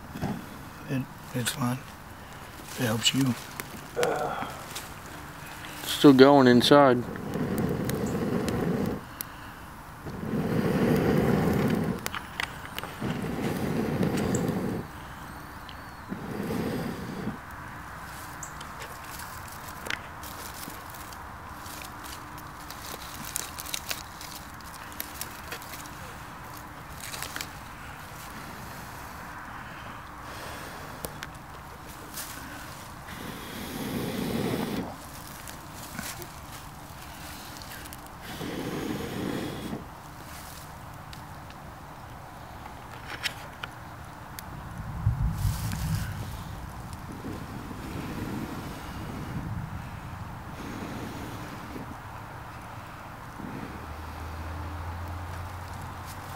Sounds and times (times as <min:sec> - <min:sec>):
Fire: 0:00.0 - 0:56.3.